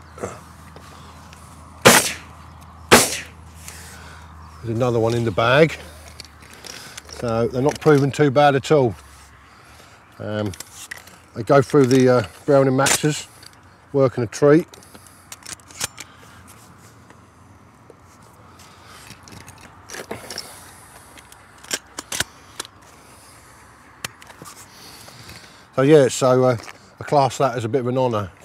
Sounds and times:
Outside, rural or natural: 0:00.0 - 0:28.4
Speech: 0:04.6 - 0:05.8, 0:07.2 - 0:09.0, 0:10.2 - 0:10.6, 0:11.4 - 0:13.3, 0:13.9 - 0:14.7, 0:25.8 - 0:28.4.

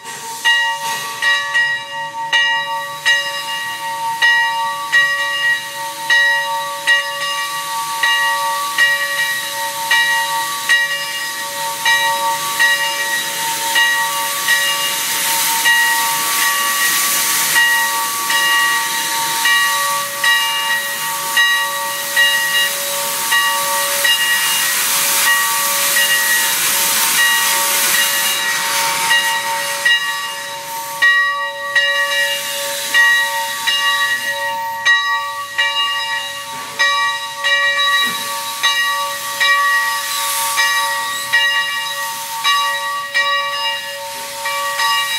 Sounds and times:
Hiss: 0:00.0 - 0:45.1.

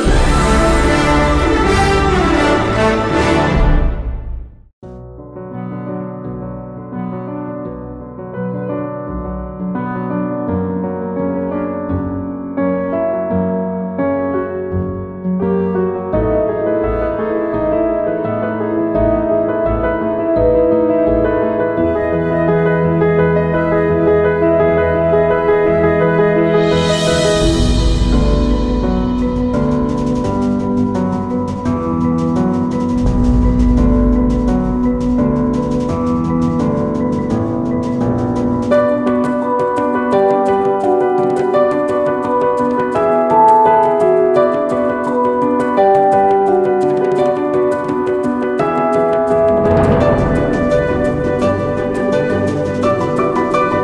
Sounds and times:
Music: 0:00.0 - 0:53.8.

